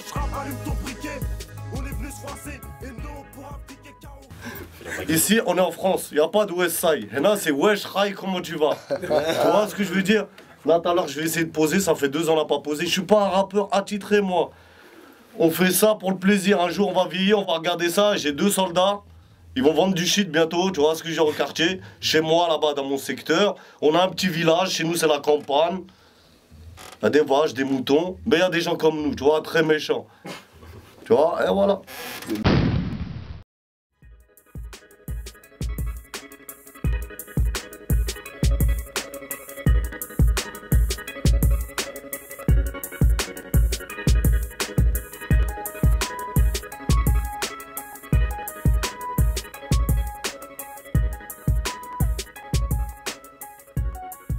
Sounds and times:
Speech: 4.9 - 14.5, 15.4 - 19.0, 19.6 - 25.9, 27.0 - 30.1, 31.0 - 31.9.

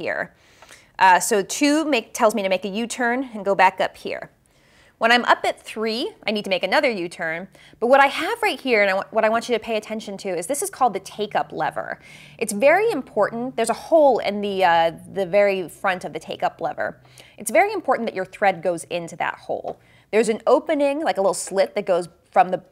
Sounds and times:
Speech: 1.0 - 4.3, 5.0 - 22.7.

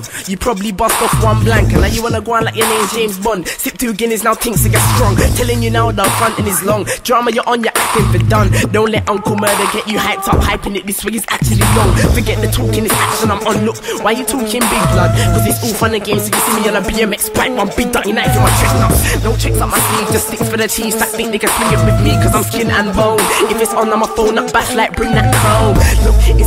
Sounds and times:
Music: 0.0 - 26.4.

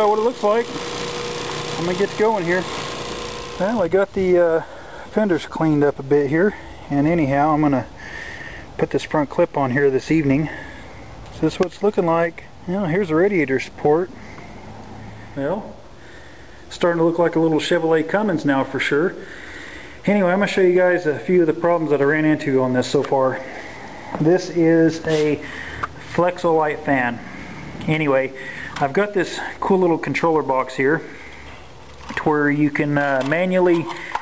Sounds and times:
Speech: 0.0 - 0.8, 1.8 - 2.7, 3.6 - 7.9, 8.8 - 10.6, 11.4 - 14.1, 15.4 - 15.8, 16.7 - 19.2, 20.0 - 23.5, 24.2 - 25.4, 26.1 - 27.2, 27.8 - 31.1, 32.1 - 34.0.

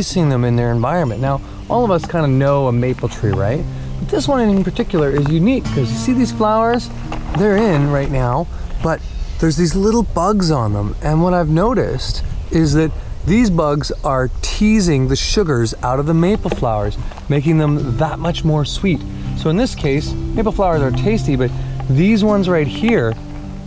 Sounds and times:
Music: 0.0 - 11.0, 14.6 - 23.6
Speech: 0.0 - 23.2.

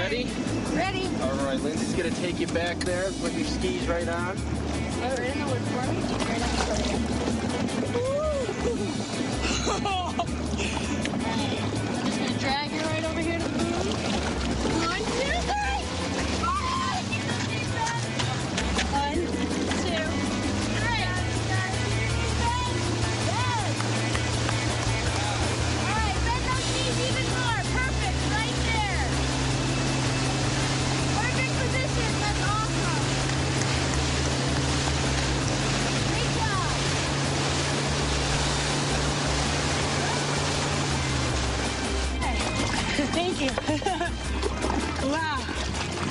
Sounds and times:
Boat, Water vehicle: 0.0 - 46.1
Music: 0.0 - 46.1
Outside, rural or natural: 0.0 - 46.1.

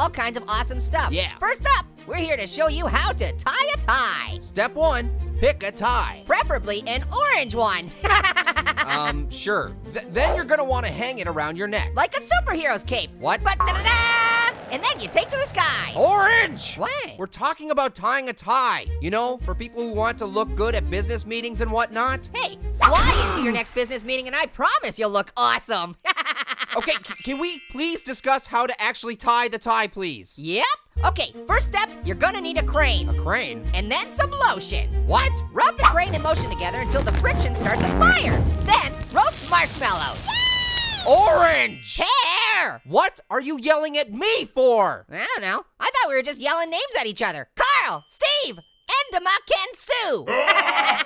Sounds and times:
Speech: 0.0 - 7.9, 8.9 - 26.0, 26.8 - 40.2, 41.1 - 50.4
Music: 0.0 - 24.5, 26.9 - 29.0, 30.5 - 40.3, 40.9 - 42.0.

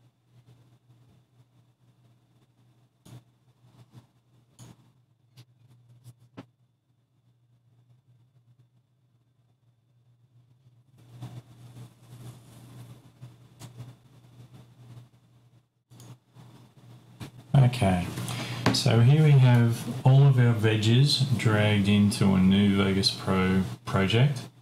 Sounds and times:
Silence: 0.0 - 17.9.

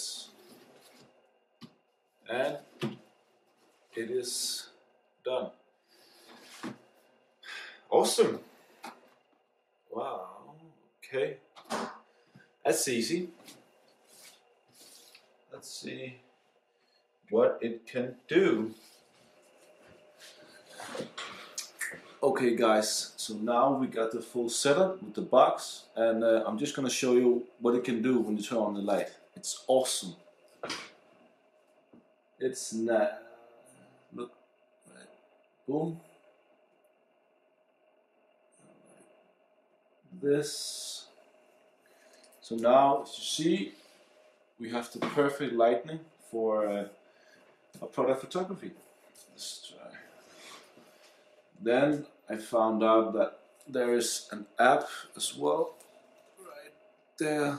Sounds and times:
Speech: 0.0 - 0.4, 2.3 - 2.7, 4.0 - 4.7, 5.3 - 5.5, 7.9 - 8.5, 9.9 - 11.4, 12.7 - 13.4, 15.5 - 16.2, 17.3 - 18.8, 20.8 - 30.8, 32.4 - 33.4, 35.7 - 36.0, 40.2 - 41.1, 42.4 - 43.8, 44.6 - 46.9, 47.8 - 50.1, 51.6 - 55.8, 56.4 - 57.5
Inside, small room: 0.0 - 57.5.

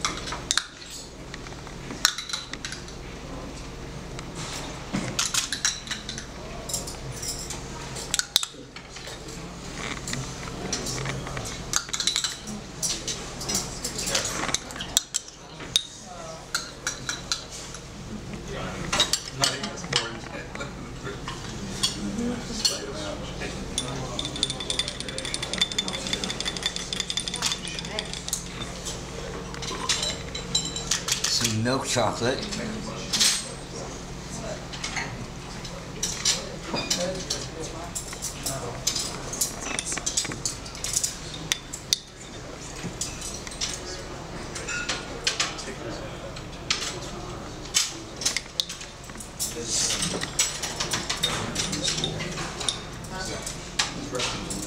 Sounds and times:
Inside, public space: 0.0 - 54.6
Speech: 18.1 - 26.4, 31.2 - 39.4.

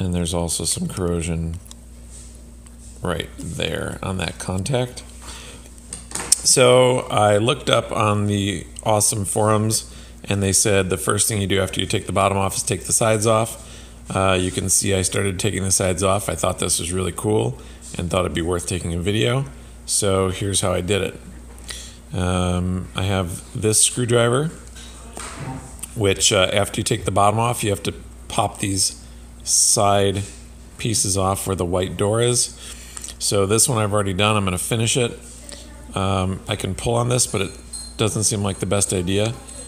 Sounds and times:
Speech: 0.0 - 1.7, 3.0 - 5.1, 6.4 - 21.3, 22.1 - 32.6, 33.2 - 39.6.

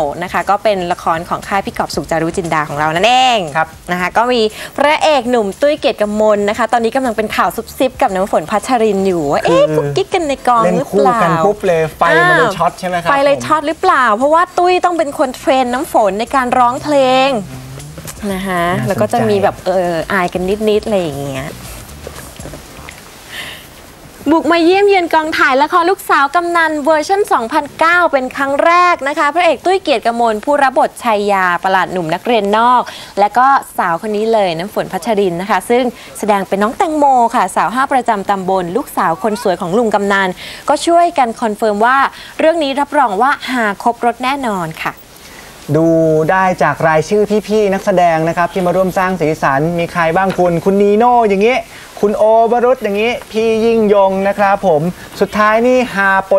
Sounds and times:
Speech: 4.8 - 21.6.

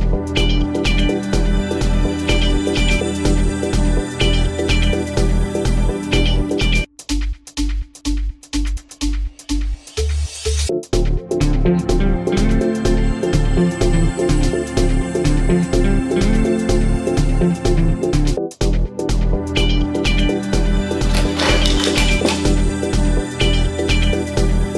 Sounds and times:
Music: 0.0 - 24.7.

